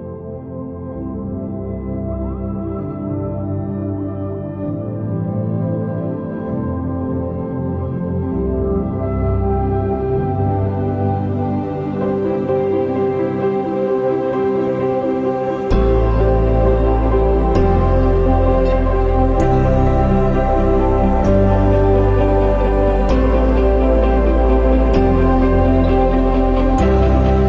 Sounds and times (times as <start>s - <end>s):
New-age music: 0.0s - 27.4s.